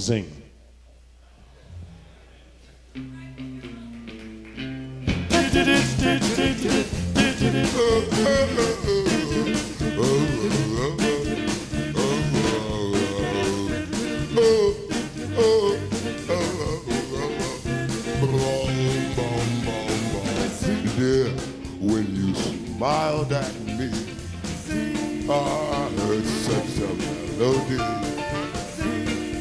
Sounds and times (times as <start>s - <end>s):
Swing music: 1.8s - 29.4s
Singing: 5.3s - 29.4s.